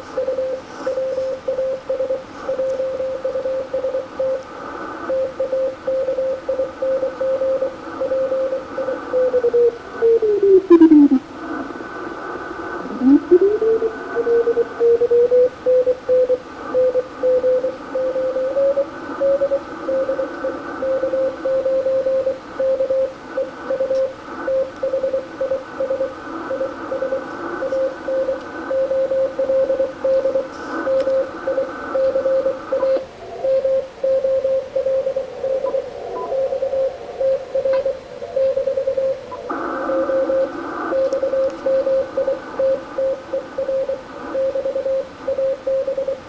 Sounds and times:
Inside, small room: 0.0 - 46.2.

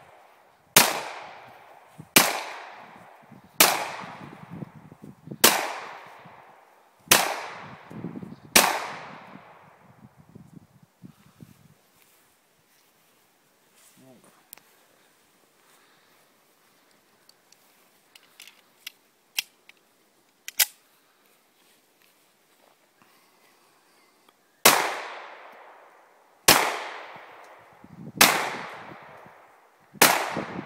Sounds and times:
Outside, rural or natural: 0.0 - 30.6
Speech: 13.8 - 14.6.

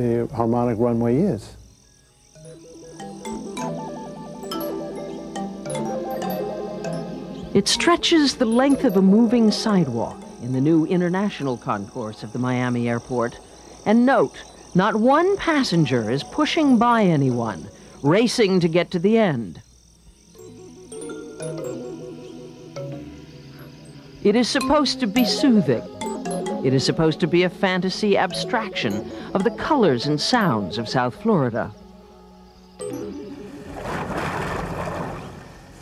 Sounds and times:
Speech: 0.0 - 1.6, 7.6 - 19.6, 24.2 - 25.9, 26.7 - 31.8
Music: 1.8 - 19.2, 19.8 - 34.5.

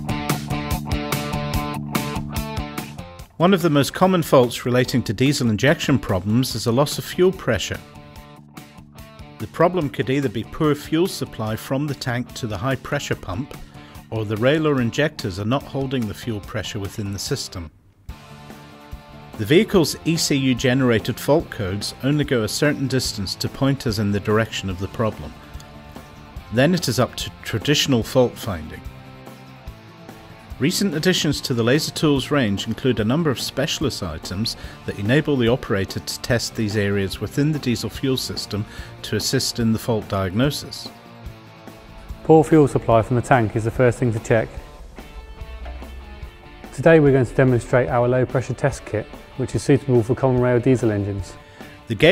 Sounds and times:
Music: 0.0 - 52.1
Speech: 3.4 - 7.9, 9.4 - 17.8, 19.4 - 25.4, 26.5 - 28.9, 30.6 - 41.0, 42.2 - 44.7, 46.7 - 52.1.

